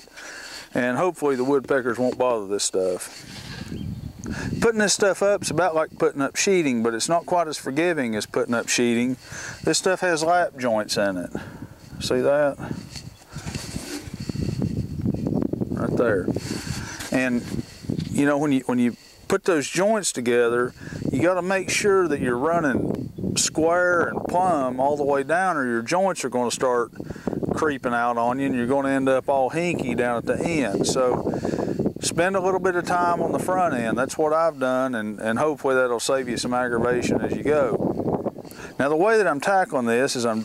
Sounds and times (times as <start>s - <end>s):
Outside, rural or natural: 0.0s - 40.4s
Speech: 0.7s - 3.1s, 4.6s - 11.4s, 12.0s - 12.7s, 15.8s - 16.3s, 17.1s - 17.5s, 18.2s - 22.8s, 23.4s - 26.9s, 27.6s - 31.2s, 32.0s - 37.8s, 38.8s - 40.4s.